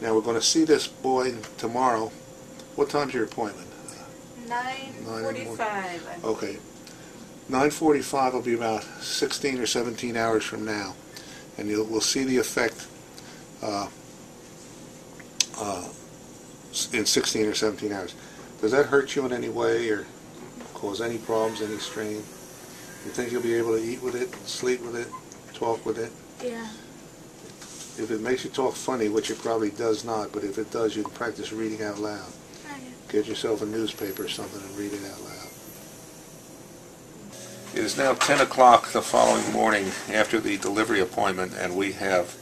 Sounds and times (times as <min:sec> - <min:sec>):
Inside, small room: 0:00.0 - 0:42.4.